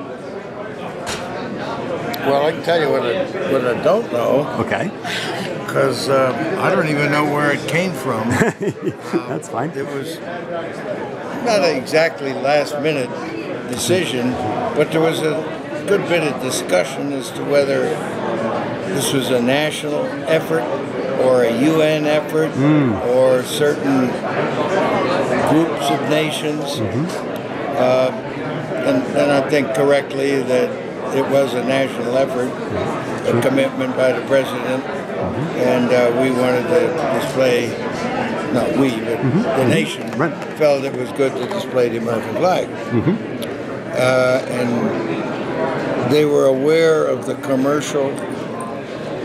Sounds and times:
Speech: 0:05.5 - 0:08.3, 0:11.4 - 0:18.2, 0:18.9 - 0:43.2, 0:43.9 - 0:45.1, 0:46.0 - 0:48.3.

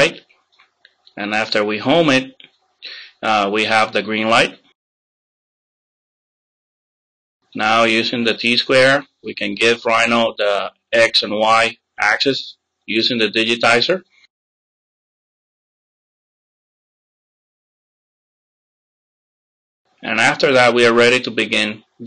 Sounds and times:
Speech: 0:00.0 - 0:00.2, 0:01.2 - 0:04.7, 0:07.6 - 0:14.1, 0:20.0 - 0:22.0
Inside, small room: 0:00.0 - 0:04.8, 0:07.4 - 0:14.4, 0:19.9 - 0:22.0.

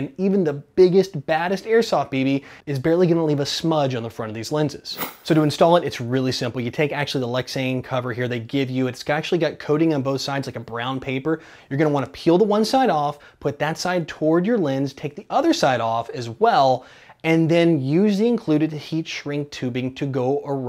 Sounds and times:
Speech: 0:00.0 - 0:20.6.

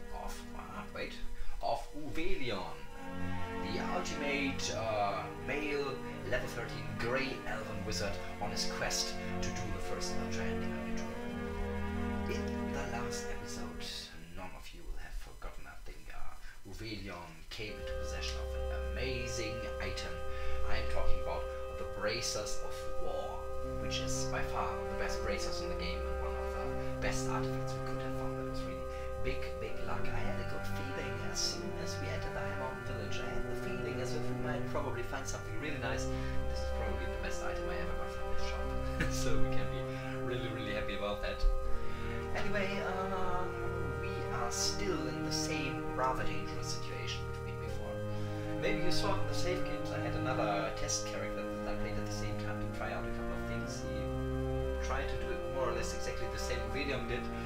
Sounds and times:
Speech: 0:00.0 - 0:02.9, 0:03.6 - 0:11.2, 0:12.3 - 0:41.6, 0:42.3 - 0:48.0, 0:48.6 - 0:54.2, 0:54.8 - 0:57.4
Music: 0:00.0 - 0:57.4.

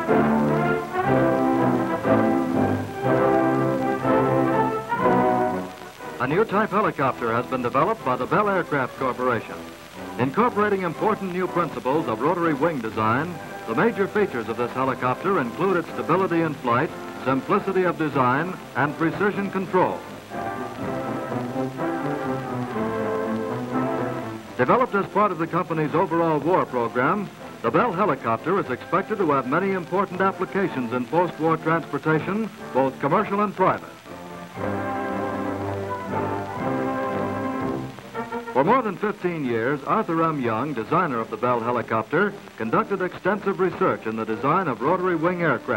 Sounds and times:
Music: 0:00.0 - 0:45.7
Speech: 0:06.2 - 0:09.6, 0:10.2 - 0:20.1, 0:24.6 - 0:33.9, 0:38.6 - 0:45.7.

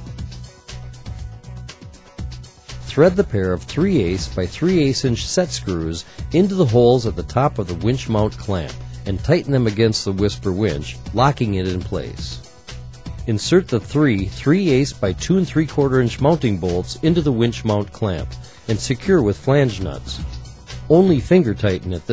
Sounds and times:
Music: 0:00.0 - 0:22.1
Speech: 0:02.9 - 0:12.4, 0:13.3 - 0:20.3, 0:20.9 - 0:22.1.

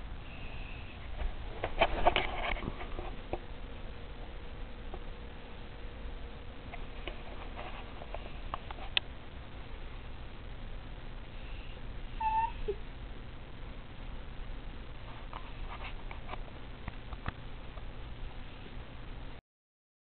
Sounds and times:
Whimper (dog): 0:12.2 - 0:12.8.

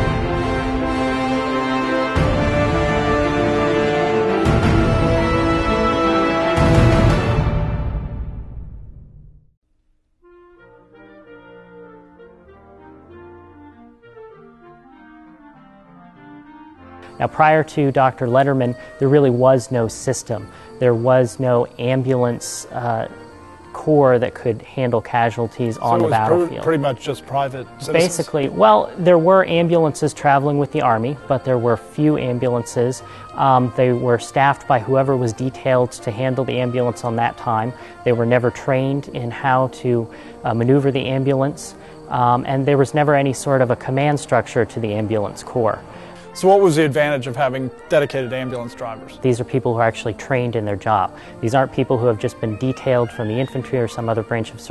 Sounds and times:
Brass instrument: 0:00.0 - 0:08.2, 0:10.3 - 0:18.6, 0:25.6 - 0:28.7, 0:45.8 - 0:50.2.

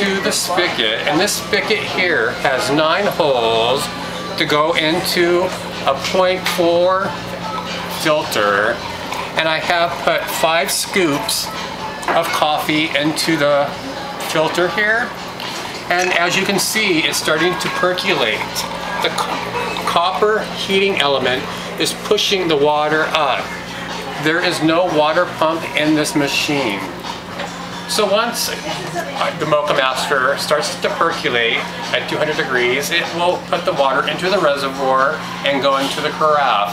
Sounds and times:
Speech: 0:00.0 - 0:15.2, 0:15.9 - 0:27.0, 0:27.9 - 0:36.7.

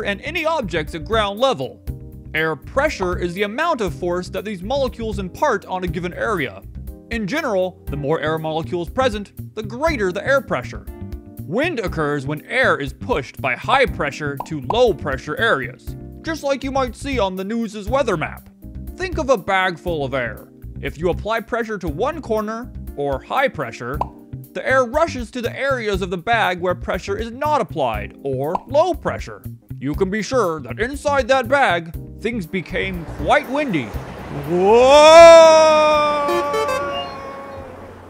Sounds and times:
Speech: 0:00.0 - 0:01.8, 0:02.4 - 0:10.8, 0:11.5 - 0:24.0, 0:24.6 - 0:36.1
Music: 0:00.0 - 0:37.8.

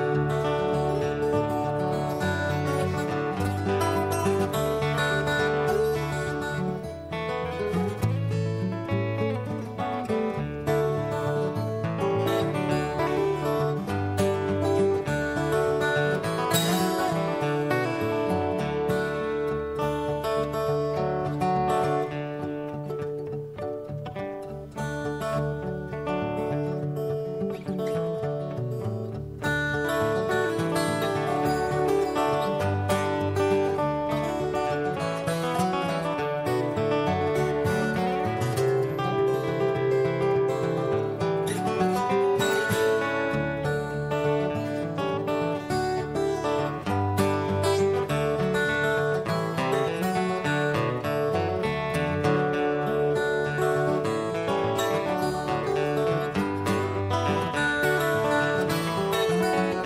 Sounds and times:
Music: 0:00.0 - 0:59.8.

